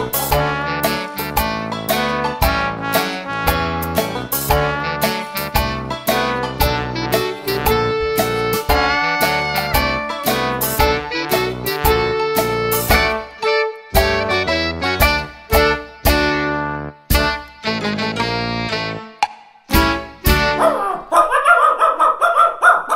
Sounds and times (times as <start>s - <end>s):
Music: 0.0s - 20.7s
Bow-wow: 20.5s - 22.9s.